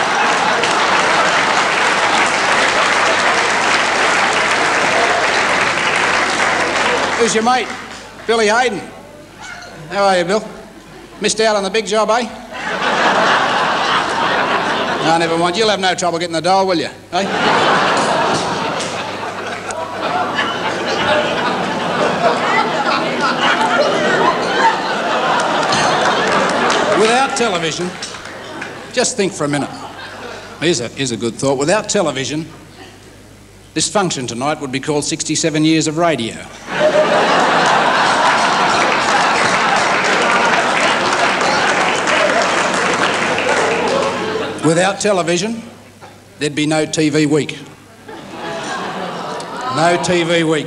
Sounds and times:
Speech: 7.2 - 9.0, 9.9 - 10.6, 11.2 - 12.4, 15.0 - 17.3, 26.9 - 28.0, 28.9 - 30.0, 30.6 - 32.5, 33.8 - 36.6, 44.6 - 45.7, 46.4 - 47.7, 49.6 - 50.6.

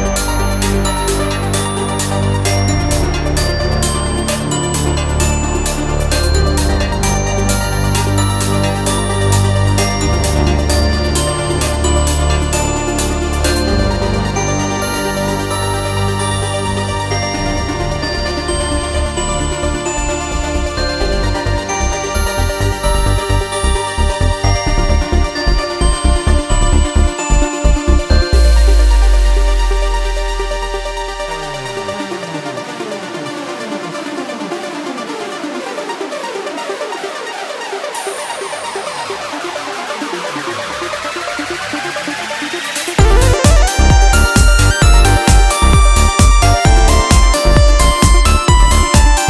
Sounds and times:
Music: 0.0 - 49.2.

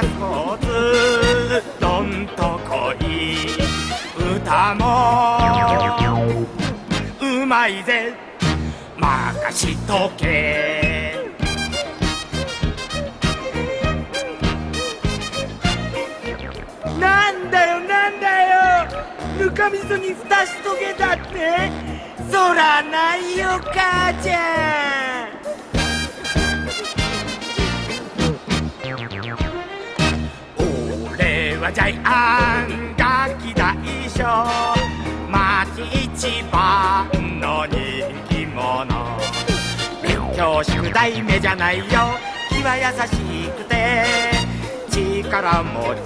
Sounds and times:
Music: 0.0 - 46.0.

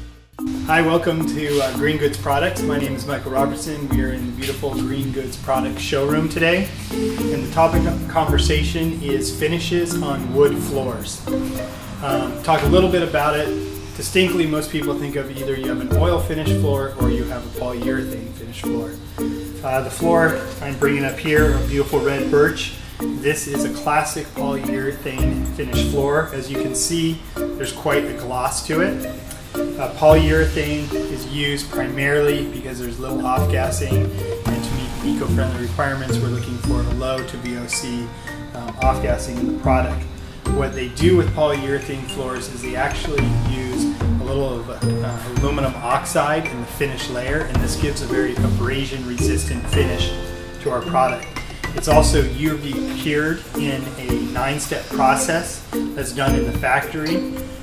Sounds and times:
Music: 0.0 - 57.6
Speech: 0.7 - 11.3, 12.0 - 19.0, 19.6 - 29.1, 29.8 - 57.2.

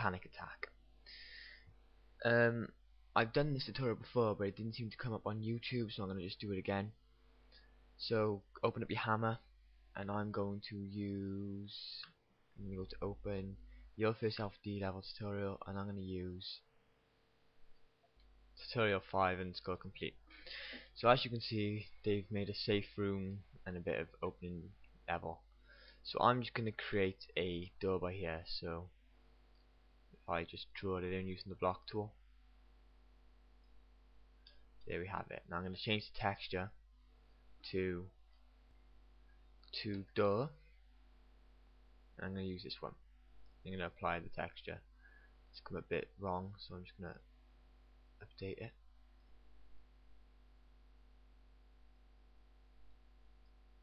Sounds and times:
Speech: 0.0 - 0.8, 2.2 - 7.0, 8.0 - 16.7, 18.6 - 20.2, 21.0 - 25.4, 26.0 - 29.0, 30.2 - 32.2, 34.8 - 36.8, 37.6 - 38.2, 39.7 - 40.6, 42.2 - 43.0, 43.6 - 44.9, 45.6 - 47.3, 48.2 - 48.8.

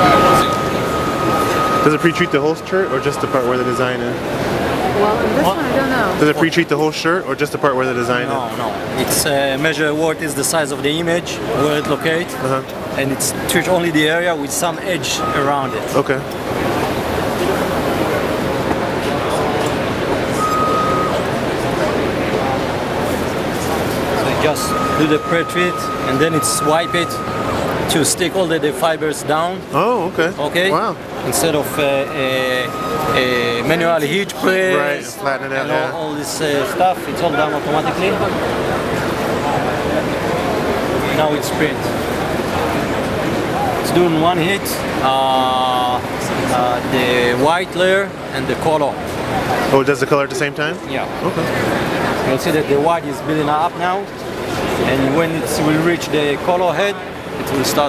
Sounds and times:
Speech: 1.7 - 4.2, 4.8 - 16.3, 23.5 - 27.2, 27.9 - 38.4, 43.6 - 51.6, 54.8 - 57.8.

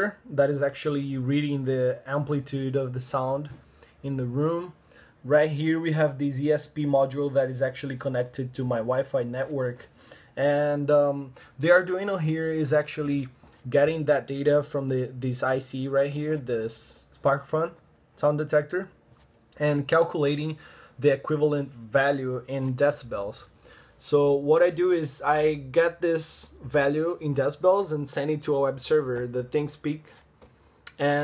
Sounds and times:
Speech: 0.0 - 19.0, 19.6 - 30.2, 30.9 - 31.2.

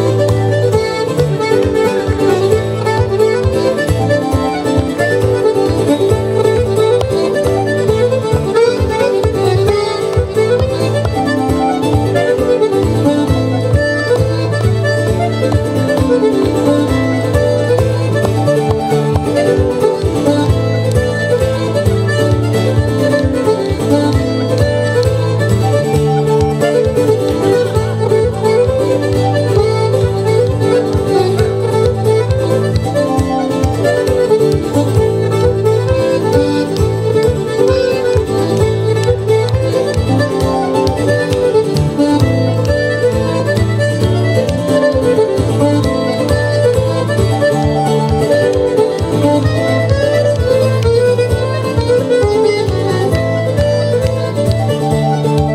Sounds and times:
Bluegrass: 0.0 - 55.5
Bowed string instrument: 0.0 - 55.5
Guitar: 0.0 - 55.5
Traditional music: 0.0 - 55.5.

